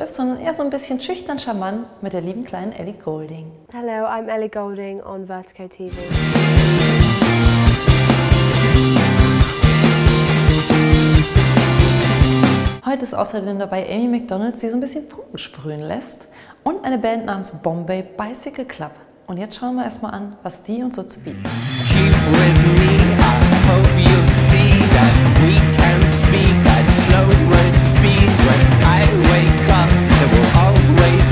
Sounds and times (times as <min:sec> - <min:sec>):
Speech: 0:00.0 - 0:06.0, 0:12.8 - 0:21.5
Music: 0:05.9 - 0:12.8, 0:21.2 - 0:31.3.